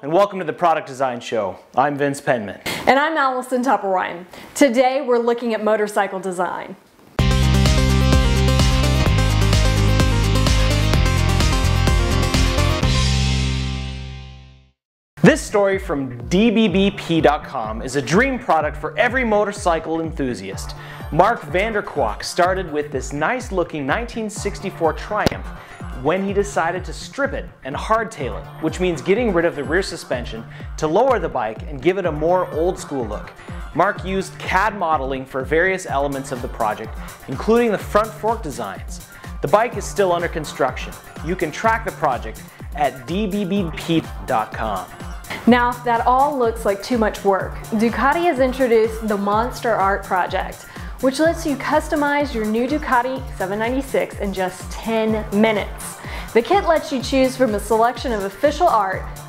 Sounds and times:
Speech: 0:00.0 - 0:06.8, 0:15.2 - 0:25.4, 0:26.0 - 0:44.9, 0:45.5 - 0:55.8, 0:56.4 - 0:59.0
Music: 0:07.2 - 0:59.2.

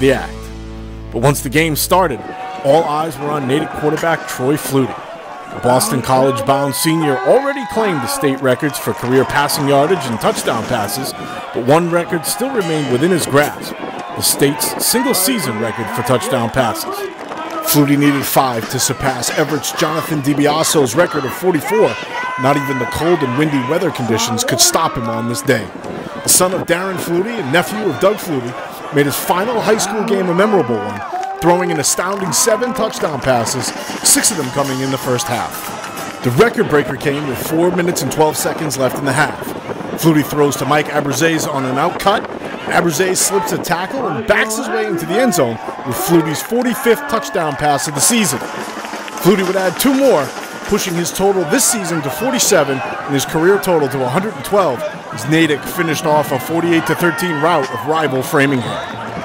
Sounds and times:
Speech: 0:00.0 - 0:00.4, 0:01.1 - 0:48.4, 0:49.2 - 0:58.9.

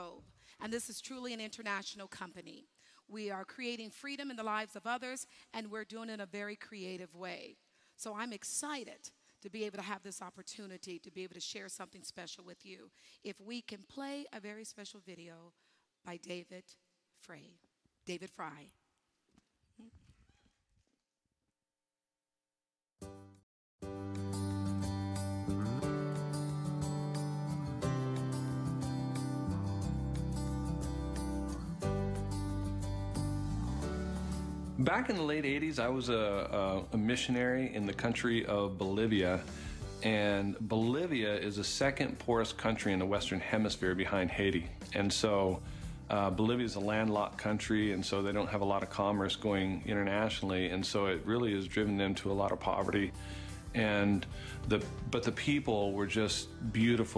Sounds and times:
Narration, monologue: 0:00.0 - 0:19.7, 0:32.3 - 0:57.1
Music: 0:23.0 - 0:57.1
Male speech, man speaking: 0:34.8 - 0:53.2, 0:53.8 - 0:57.1.

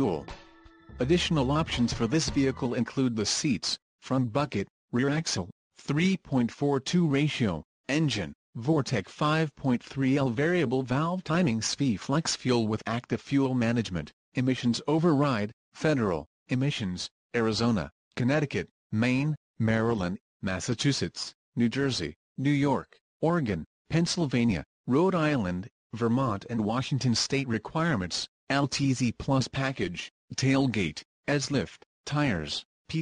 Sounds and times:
Speech: 0:00.0 - 0:33.0.

